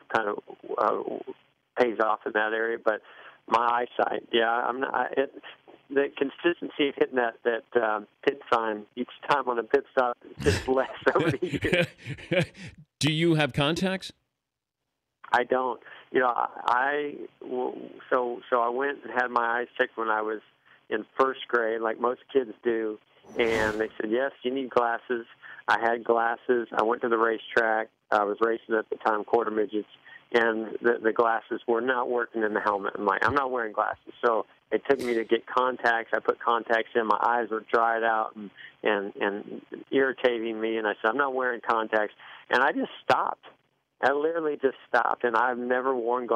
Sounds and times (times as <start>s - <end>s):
Speech synthesizer: 0.0s - 14.1s, 15.4s - 20.4s, 21.0s - 46.3s.